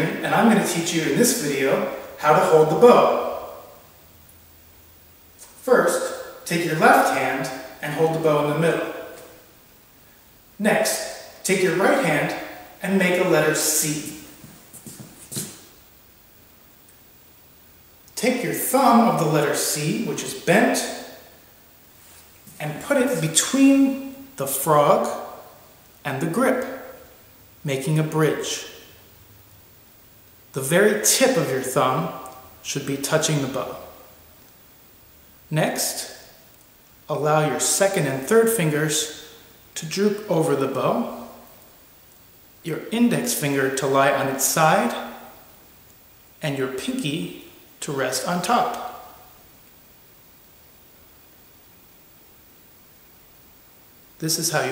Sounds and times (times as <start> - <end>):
Speech: 0.0 - 3.5, 5.6 - 9.1, 10.6 - 14.2, 18.2 - 21.1, 22.6 - 25.3, 26.0 - 26.8, 27.6 - 28.8, 30.6 - 33.9, 35.5 - 36.2, 37.1 - 39.2, 39.8 - 41.4, 42.6 - 45.2, 46.4 - 49.0, 54.2 - 54.7.